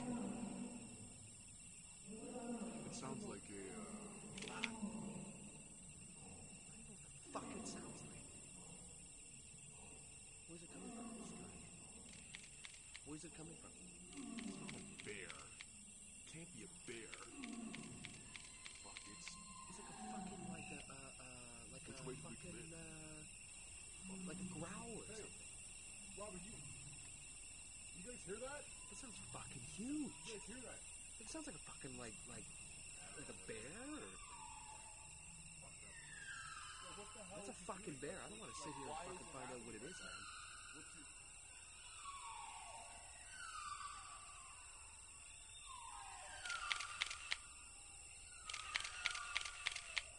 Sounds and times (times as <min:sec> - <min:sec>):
Speech: 0:02.1 - 0:05.0, 0:06.7 - 0:08.3, 0:10.5 - 0:11.6, 0:13.1 - 0:15.5, 0:16.3 - 0:17.5, 0:18.9 - 0:23.3, 0:24.0 - 0:25.3, 0:26.2 - 0:26.7, 0:28.0 - 0:34.2, 0:36.9 - 0:40.2.